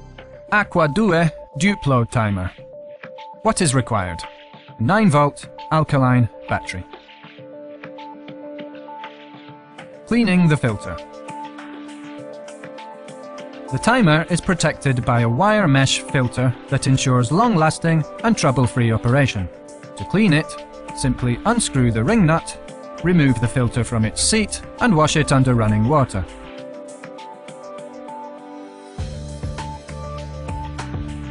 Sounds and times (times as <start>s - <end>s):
Music: 0.0s - 31.3s
Speech: 0.5s - 2.6s, 3.4s - 7.0s, 10.1s - 11.0s, 13.7s - 26.4s.